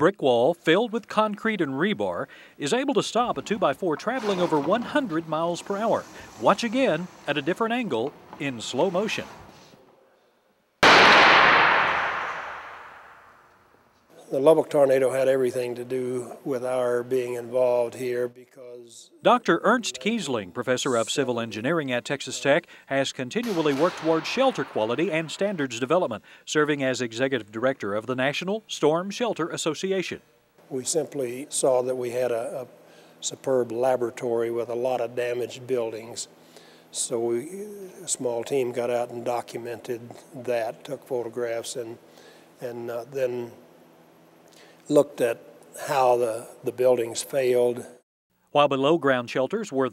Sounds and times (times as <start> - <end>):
Speech: 0.0 - 9.4, 14.1 - 36.3, 36.9 - 42.0, 42.6 - 43.6, 44.9 - 49.9.